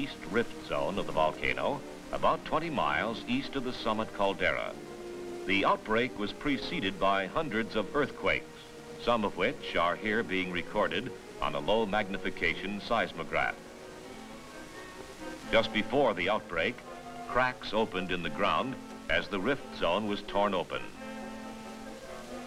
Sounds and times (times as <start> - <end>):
Speech: 0.0 - 4.8, 5.5 - 13.6, 15.5 - 21.0.